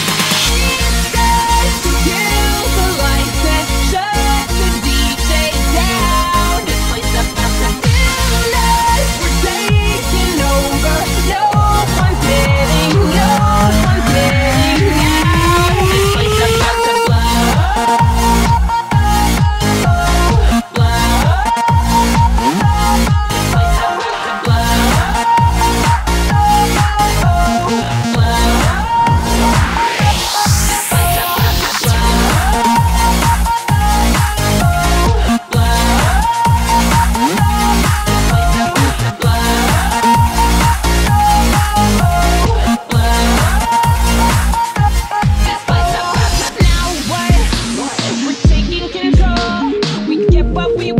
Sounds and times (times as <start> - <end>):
Rhythm and blues: 0.0 - 50.9.